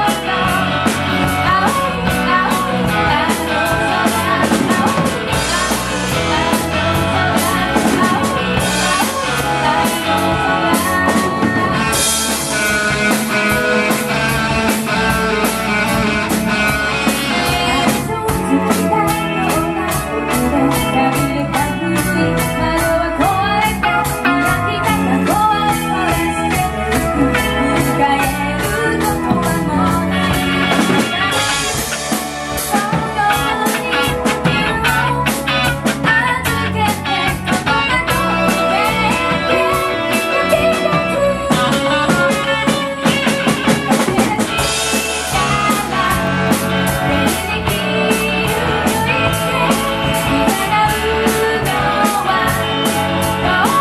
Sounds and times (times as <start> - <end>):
Drum kit: 0.0 - 53.8
Guitar: 0.0 - 53.8
Rock music: 0.0 - 53.8.